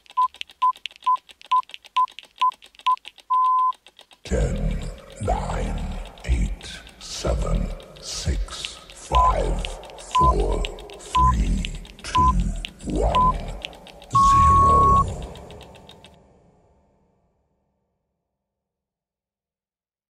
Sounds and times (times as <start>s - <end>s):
Speech: 4.3s - 15.5s.